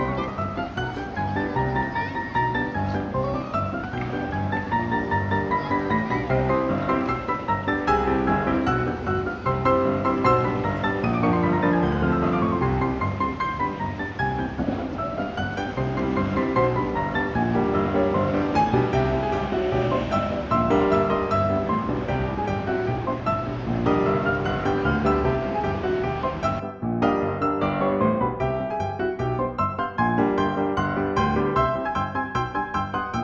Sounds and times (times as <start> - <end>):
Music: 0.0 - 33.2.